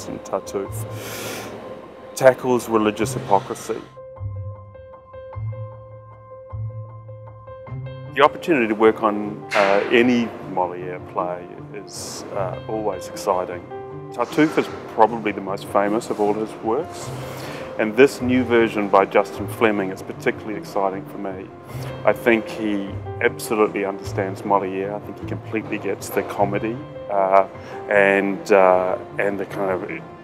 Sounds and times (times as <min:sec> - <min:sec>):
Speech: 0:00.0 - 0:00.8, 0:02.2 - 0:03.9, 0:08.2 - 0:13.6, 0:14.2 - 0:17.1, 0:17.8 - 0:30.0
Music: 0:00.0 - 0:30.2.